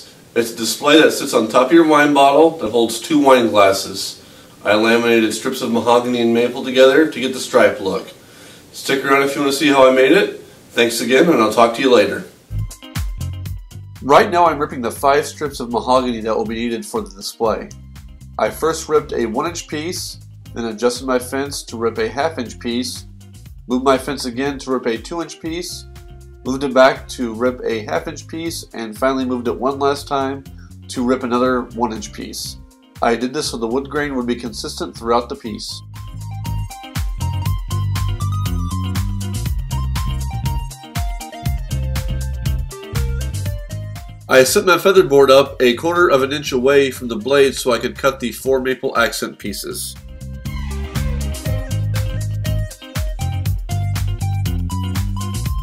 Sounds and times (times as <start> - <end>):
Music: 0.0 - 8.1, 8.9 - 55.6
Speech: 0.0 - 8.2, 8.8 - 12.3, 14.0 - 17.7, 18.4 - 23.0, 23.7 - 35.8, 44.3 - 50.0.